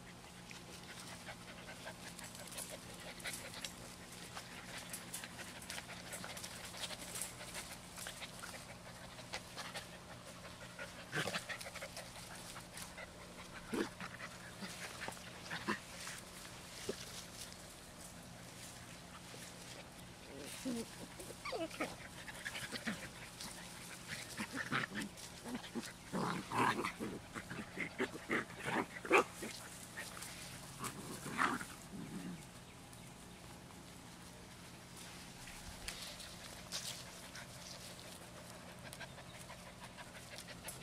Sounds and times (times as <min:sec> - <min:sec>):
Whimper (dog): 0:21.4 - 0:21.9.